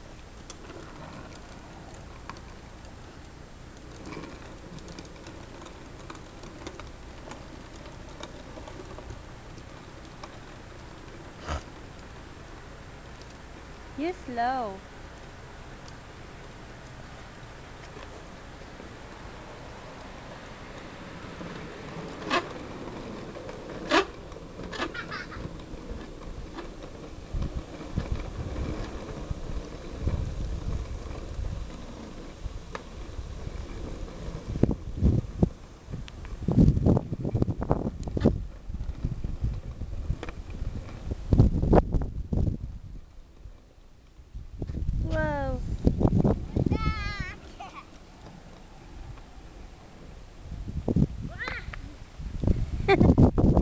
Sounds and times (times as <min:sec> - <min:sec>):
Vehicle: 0:00.0 - 0:53.6.